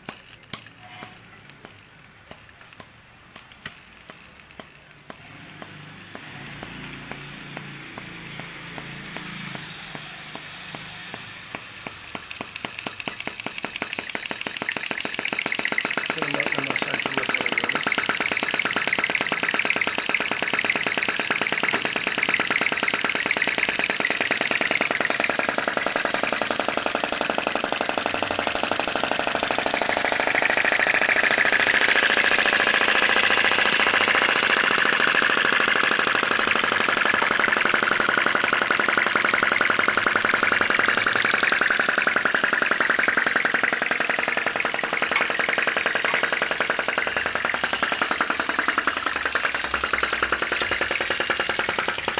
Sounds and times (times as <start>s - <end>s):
Idling: 5.1s - 52.1s.